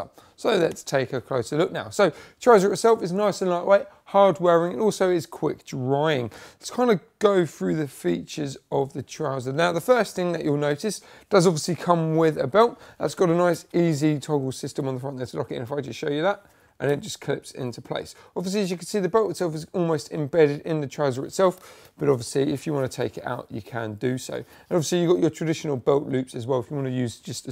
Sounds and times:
Speech: 0:00.0 - 0:27.5.

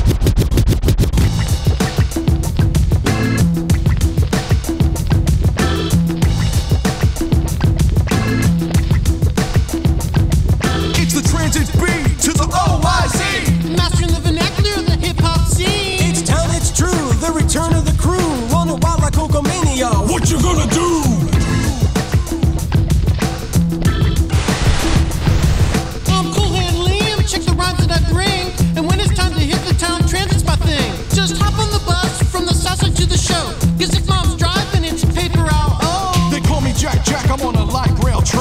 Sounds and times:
Funk: 0:00.0 - 0:38.4.

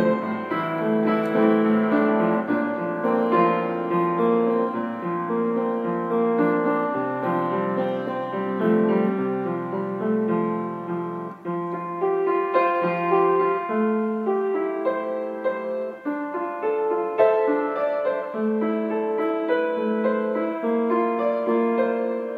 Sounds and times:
Piano: 0:00.0 - 0:22.3.

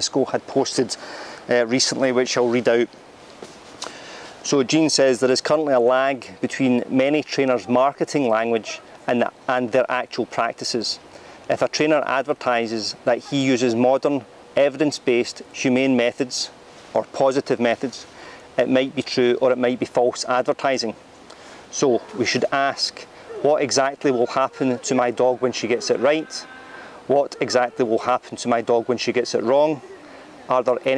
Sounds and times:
Speech: 0:00.0 - 0:02.9, 0:04.4 - 0:21.0, 0:21.7 - 0:26.5, 0:27.1 - 0:30.9.

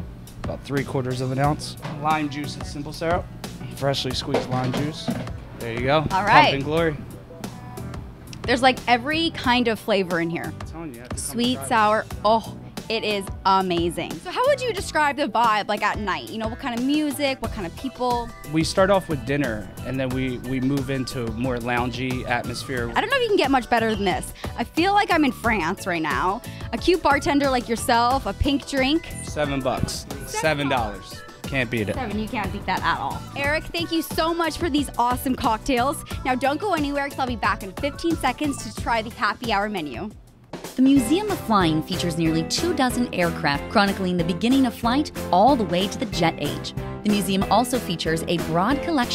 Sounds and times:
Music: 0:00.0 - 0:49.1
Speech: 0:05.6 - 0:07.0, 0:08.5 - 0:23.4, 0:24.7 - 0:40.1, 0:40.8 - 0:49.1.

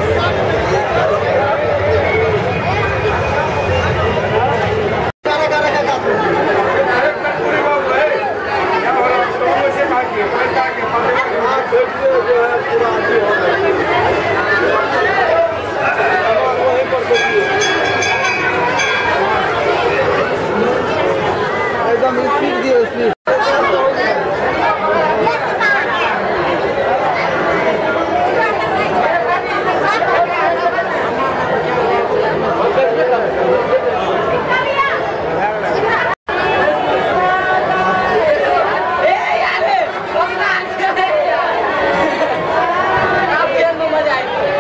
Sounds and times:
Chatter: 0:00.0 - 0:44.6
Inside, large room or hall: 0:00.0 - 0:44.6
Speech: 0:00.0 - 0:44.6.

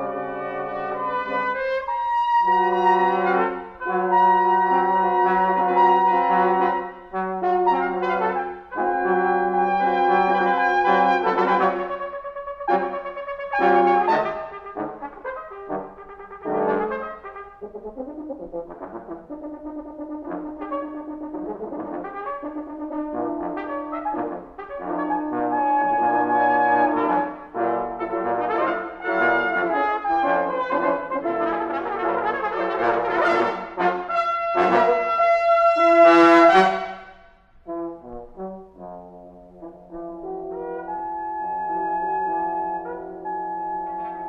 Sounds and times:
Trombone: 0:00.0 - 0:44.2
Trumpet: 0:00.0 - 0:44.2.

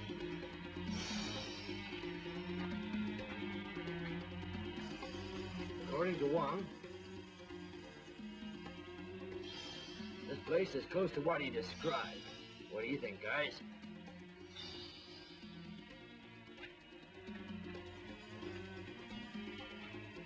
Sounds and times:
Music: 0:00.0 - 0:20.2
Speech: 0:05.9 - 0:06.7, 0:10.3 - 0:13.6.

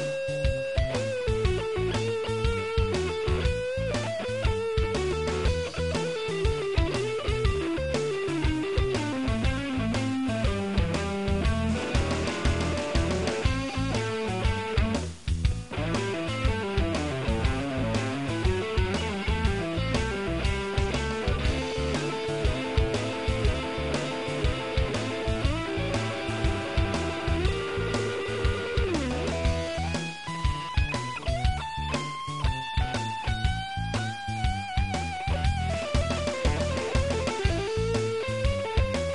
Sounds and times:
Bass guitar: 0:00.0 - 0:39.1
Strum: 0:00.0 - 0:39.1.

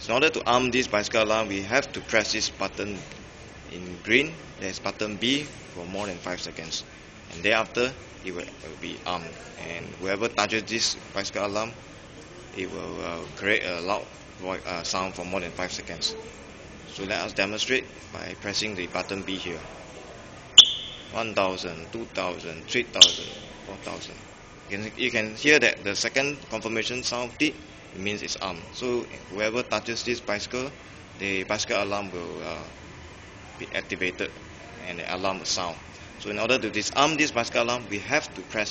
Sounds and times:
Speech: 0:00.0 - 0:03.0, 0:03.7 - 0:11.8, 0:12.4 - 0:19.8, 0:21.2 - 0:32.8, 0:33.6 - 0:38.7.

